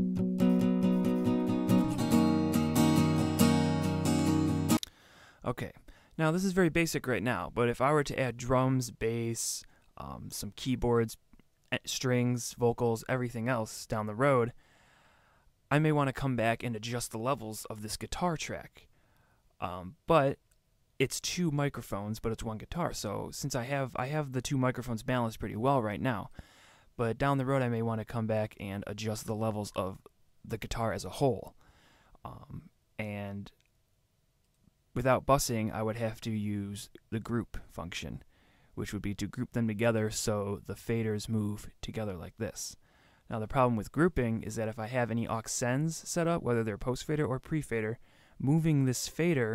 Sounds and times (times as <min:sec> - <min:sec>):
Speech: 0:05.4 - 0:14.6, 0:15.7 - 0:18.9, 0:19.6 - 0:20.4, 0:21.0 - 0:26.3, 0:27.0 - 0:31.6, 0:32.3 - 0:33.6, 0:35.0 - 0:38.2, 0:38.8 - 0:49.5.